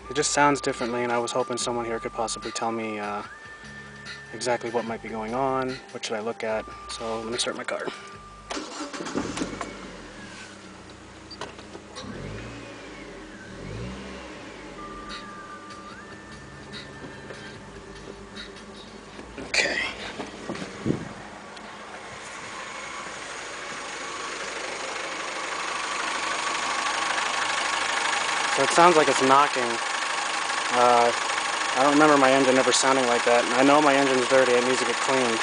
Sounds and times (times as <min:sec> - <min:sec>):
Medium engine (mid frequency): 0:00.0 - 0:35.4
Vehicle: 0:00.0 - 0:35.4
Speech: 0:00.1 - 0:03.3, 0:04.4 - 0:07.9, 0:28.6 - 0:29.8, 0:30.7 - 0:31.2, 0:31.8 - 0:35.4
Idling: 0:06.8 - 0:35.4.